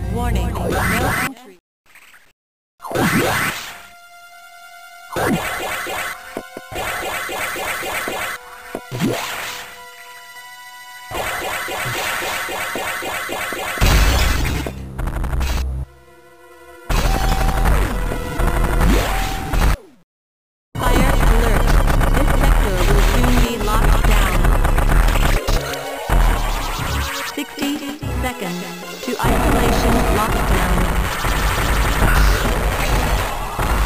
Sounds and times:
Music: 0:00.0 - 0:01.0, 0:03.0 - 0:13.5, 0:15.6 - 0:19.2, 0:20.8 - 0:33.8
Speech: 0:00.0 - 0:01.6, 0:20.8 - 0:24.5, 0:27.4 - 0:31.0.

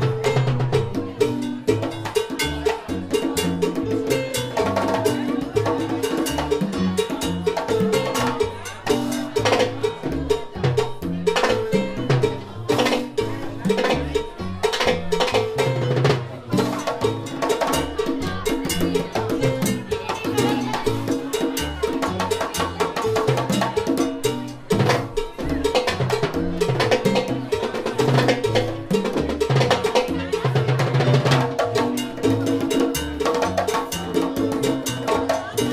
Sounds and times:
Percussion: 0:00.0 - 0:35.7
Speech: 0:00.0 - 0:35.7.

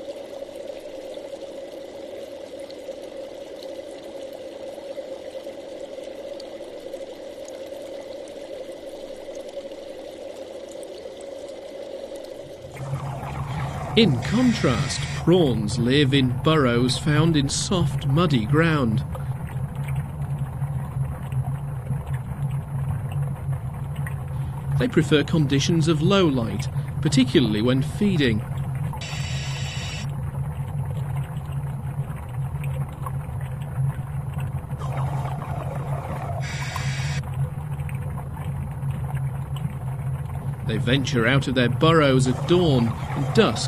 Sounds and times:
Speech: 0:14.0 - 0:19.1, 0:24.8 - 0:28.4, 0:40.7 - 0:43.6.

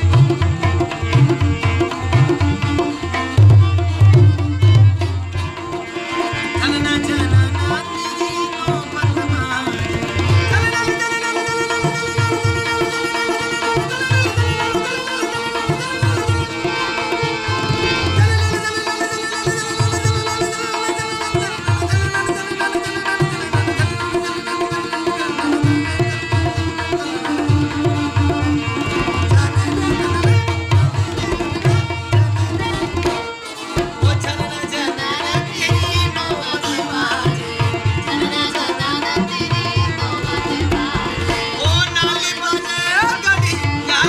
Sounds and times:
Tabla: 0:00.0 - 0:44.0.

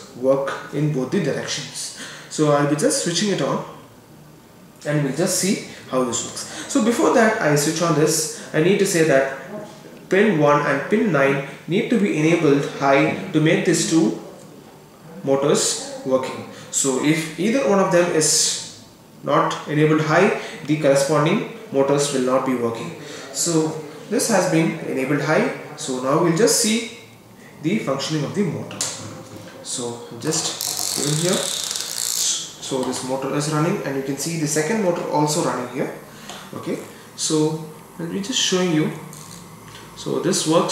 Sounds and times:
Speech: 0:00.0 - 0:03.8, 0:04.8 - 0:31.6, 0:32.2 - 0:39.1, 0:40.0 - 0:40.7
Inside, small room: 0:00.0 - 0:40.7.

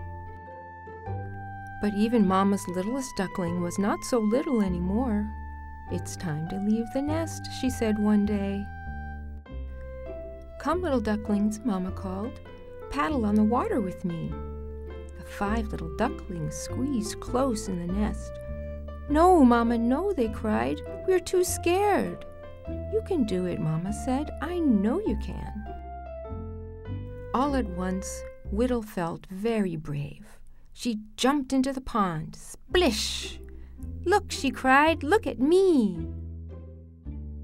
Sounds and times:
Music: 0:00.0 - 0:37.4
Speech: 0:01.8 - 0:05.3, 0:05.9 - 0:08.7, 0:10.6 - 0:14.4, 0:15.2 - 0:18.3, 0:19.1 - 0:22.2, 0:22.9 - 0:25.6, 0:27.4 - 0:33.4, 0:34.1 - 0:36.1.

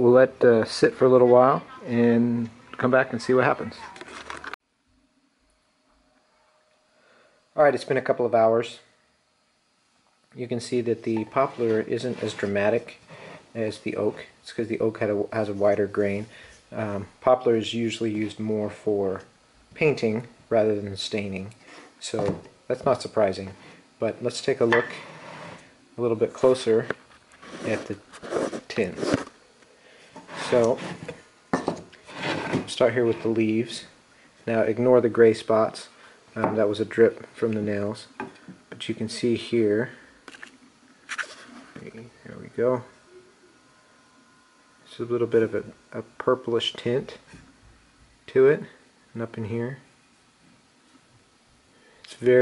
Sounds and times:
Speech: 0:00.0 - 0:04.0, 0:07.6 - 0:08.9, 0:10.4 - 0:13.0, 0:13.6 - 0:25.0, 0:26.0 - 0:27.0, 0:27.6 - 0:29.2, 0:30.4 - 0:30.9, 0:32.6 - 0:40.0, 0:41.8 - 0:43.0, 0:44.9 - 0:47.4, 0:48.3 - 0:49.9, 0:52.1 - 0:52.4
Inside, small room: 0:00.0 - 0:52.4.

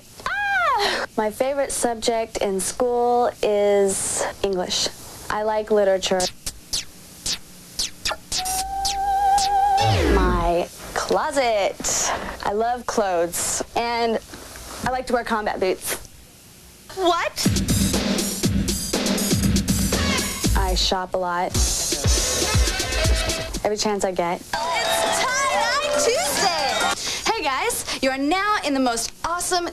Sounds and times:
Speech: 0:01.2 - 0:06.3, 0:10.2 - 0:14.2, 0:14.8 - 0:16.1, 0:20.6 - 0:22.1, 0:23.6 - 0:24.5, 0:25.1 - 0:29.7.

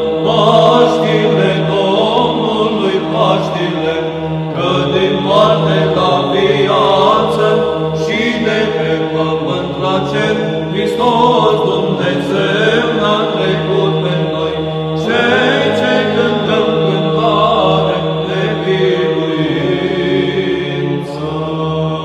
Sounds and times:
Choir: 0:00.0 - 0:22.0
Christian music: 0:00.0 - 0:22.0.

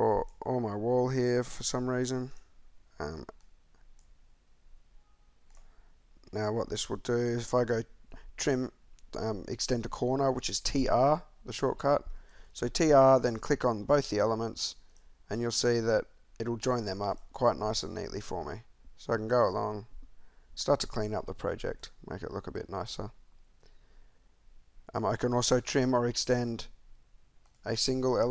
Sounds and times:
Speech: 0:00.0 - 0:02.4, 0:03.0 - 0:03.4, 0:06.3 - 0:19.9, 0:20.6 - 0:23.2, 0:24.9 - 0:26.8, 0:27.6 - 0:28.3.

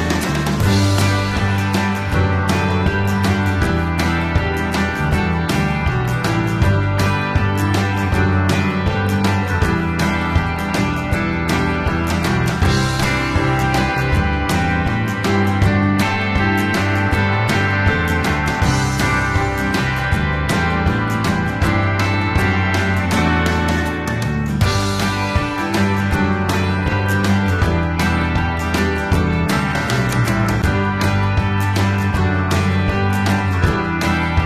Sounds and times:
Music: 0:00.0 - 0:34.4.

